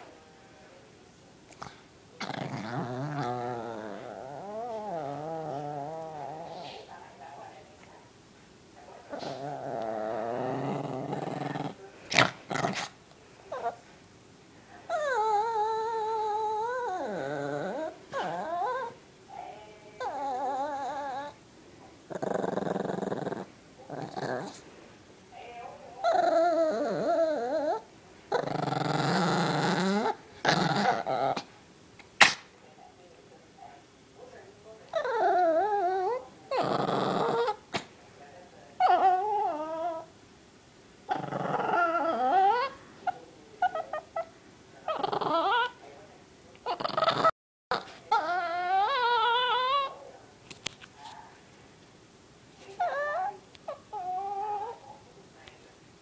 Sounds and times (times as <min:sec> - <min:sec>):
Whimper (dog): 0:14.9 - 0:19.0, 0:20.0 - 0:21.4, 0:26.0 - 0:27.9, 0:34.9 - 0:37.6, 0:38.8 - 0:40.1, 0:41.1 - 0:42.8, 0:44.9 - 0:45.8, 0:46.7 - 0:50.0, 0:52.8 - 0:54.8.